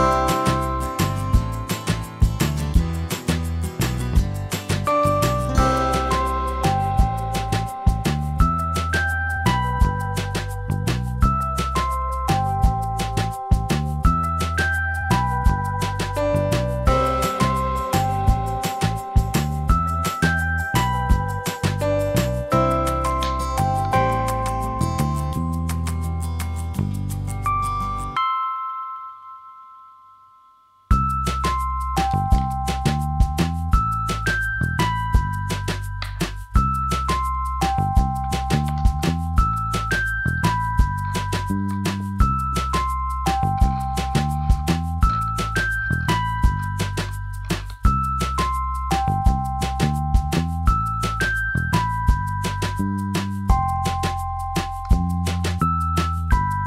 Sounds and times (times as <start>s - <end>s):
Music: 0.0s - 29.4s, 30.2s - 56.6s
Inside, small room: 0.0s - 56.6s.